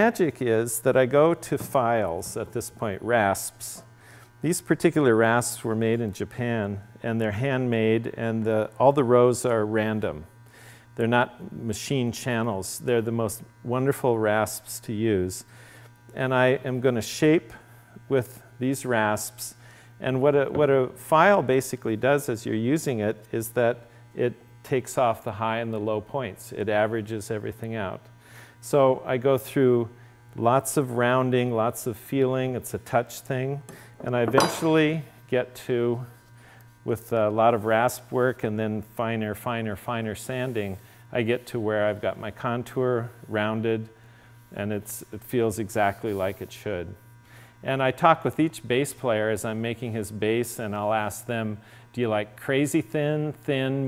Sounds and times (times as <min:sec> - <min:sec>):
Speech: 0:00.0 - 0:10.3, 0:11.0 - 0:15.5, 0:16.1 - 0:36.2, 0:36.9 - 0:47.0, 0:47.6 - 0:53.8.